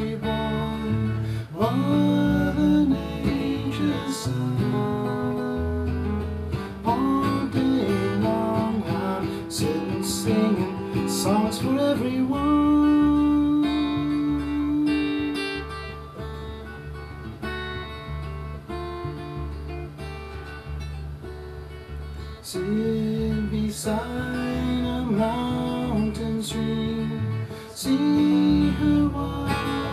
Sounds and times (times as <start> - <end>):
Acoustic guitar: 0.0 - 29.9.